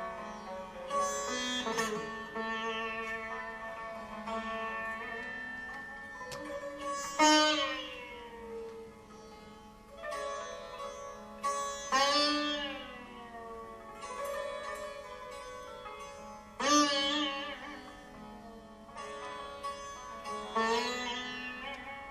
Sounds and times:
Bowed string instrument: 0.0 - 22.1
Carnatic music: 0.0 - 22.1
Sitar: 0.0 - 22.1.

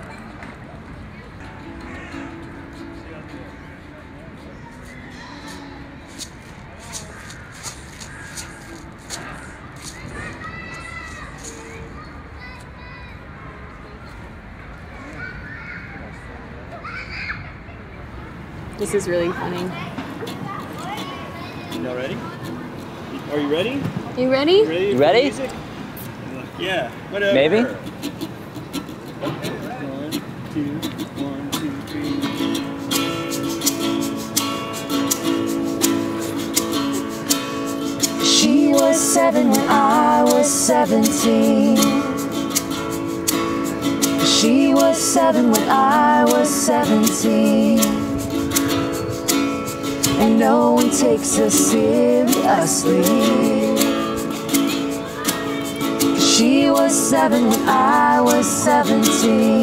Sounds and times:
Music: 1.4 - 6.5, 31.0 - 59.6.

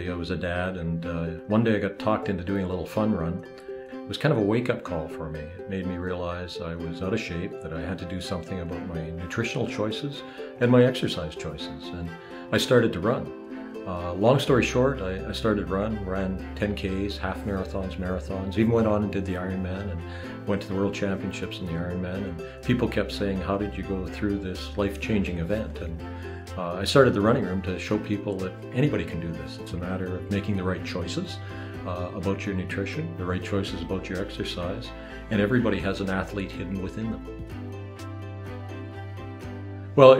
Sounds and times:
Speech: 0.0 - 3.5, 4.1 - 37.4, 40.0 - 40.1
Music: 0.0 - 40.1.

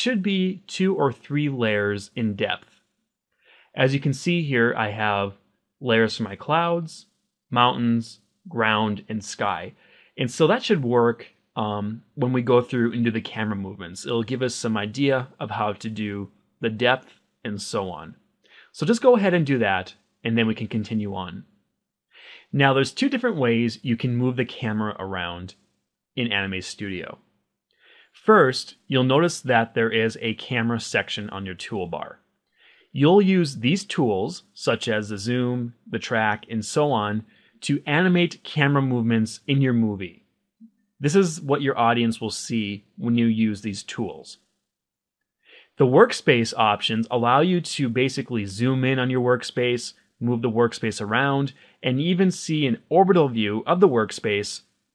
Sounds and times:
Speech: 0.0 - 2.7, 3.7 - 21.4, 22.2 - 25.6, 26.2 - 27.2, 28.2 - 32.2, 32.9 - 40.2, 41.0 - 44.4, 45.6 - 54.6.

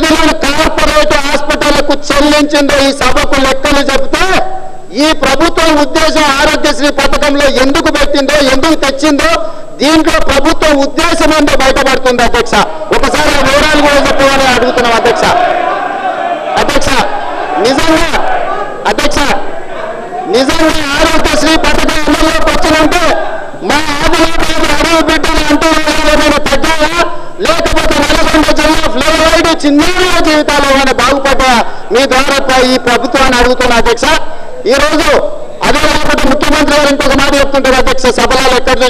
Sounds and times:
Male speech, man speaking: 0.0 - 15.6, 16.5 - 38.8
Narration, monologue: 0.0 - 38.8.

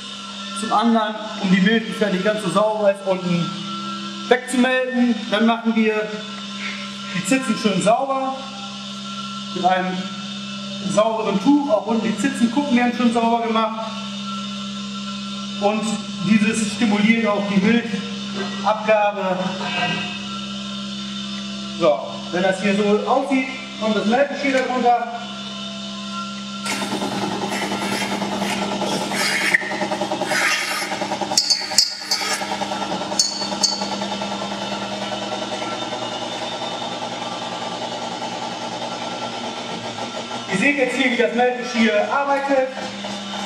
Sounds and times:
Speech: 0.6 - 3.6, 4.3 - 6.2, 7.2 - 8.5, 9.6 - 10.1, 10.8 - 14.0, 15.6 - 20.1, 21.8 - 25.3, 40.5 - 42.9.

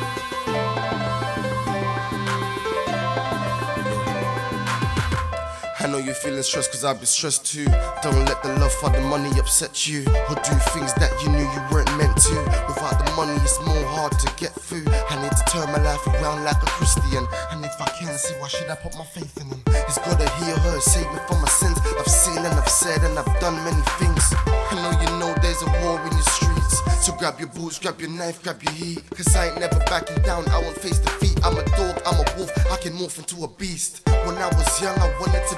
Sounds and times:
Music: 0.0 - 35.5
Rapping: 5.6 - 35.5.

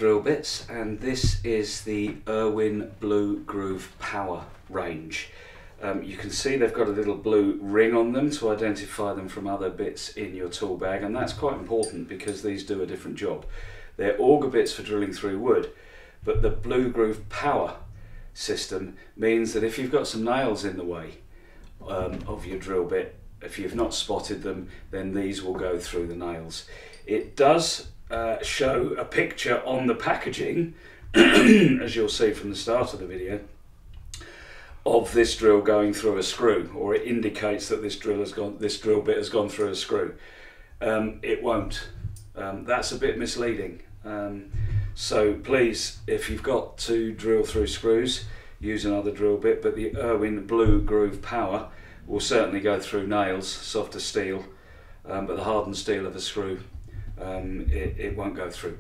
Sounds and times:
Speech: 0.0 - 21.2, 21.8 - 33.6, 34.8 - 40.2, 40.8 - 58.8.

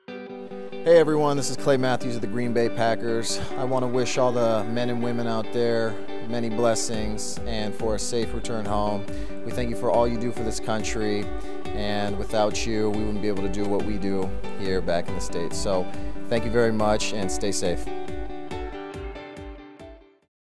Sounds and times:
Music: 0.0 - 20.3
Speech: 0.9 - 17.9.

